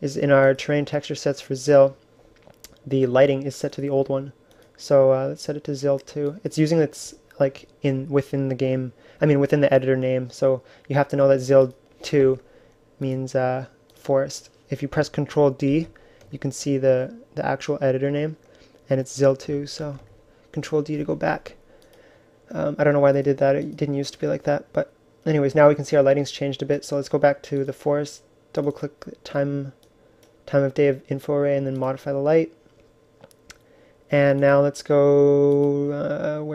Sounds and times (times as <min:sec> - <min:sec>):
Speech: 0:00.0 - 0:02.0, 0:02.8 - 0:12.4, 0:13.0 - 0:21.6, 0:22.5 - 0:29.8, 0:30.5 - 0:32.6, 0:34.1 - 0:36.5.